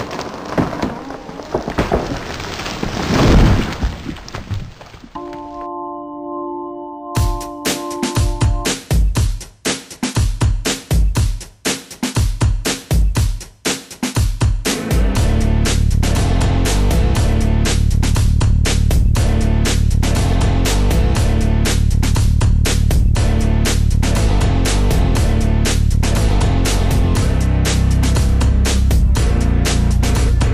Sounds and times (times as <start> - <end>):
Music: 5.2 - 30.5.